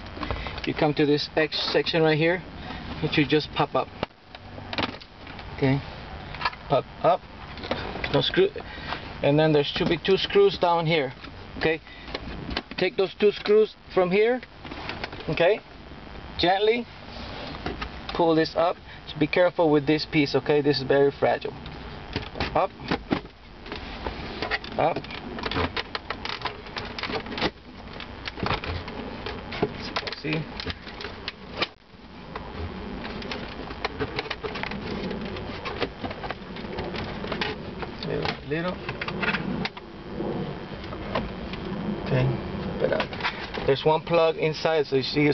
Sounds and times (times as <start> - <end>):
Speech: 0.7 - 2.4, 3.0 - 3.9, 5.6 - 5.9, 8.1 - 8.6, 9.2 - 11.8, 12.8 - 14.4, 15.3 - 15.6, 16.4 - 16.9, 18.1 - 21.6, 24.8 - 25.0, 29.8 - 30.5, 38.0 - 38.8, 43.7 - 45.3.